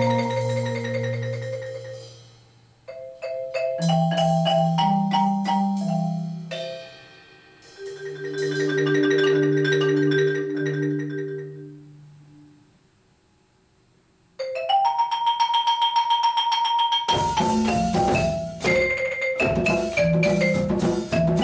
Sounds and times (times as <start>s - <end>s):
Marimba, xylophone: 0.0s - 2.2s, 2.9s - 7.1s, 7.8s - 12.0s, 14.4s - 21.4s.